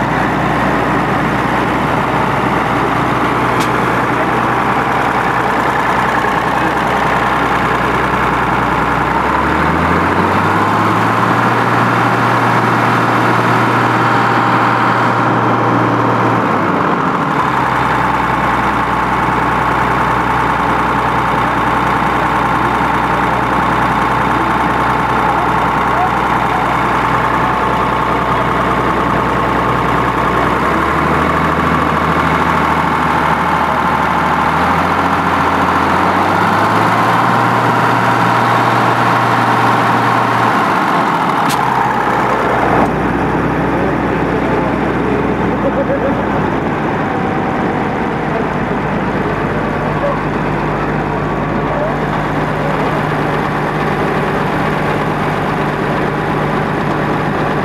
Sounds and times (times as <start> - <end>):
Speech: 24.3 - 29.3, 45.5 - 46.4.